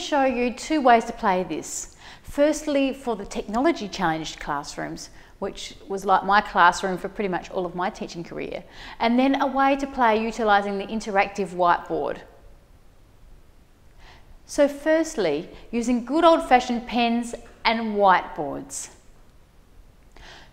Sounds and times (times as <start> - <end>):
Speech: 0.0 - 12.3, 14.5 - 19.0.